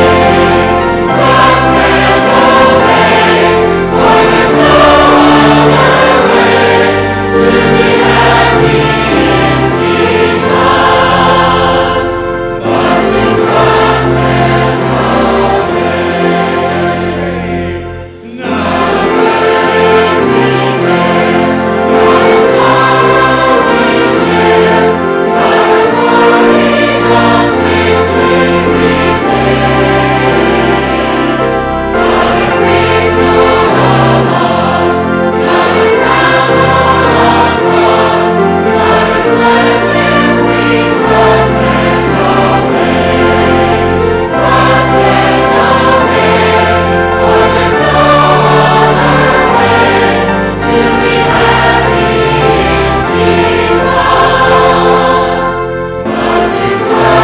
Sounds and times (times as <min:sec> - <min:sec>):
Choir: 0:00.0 - 0:57.2.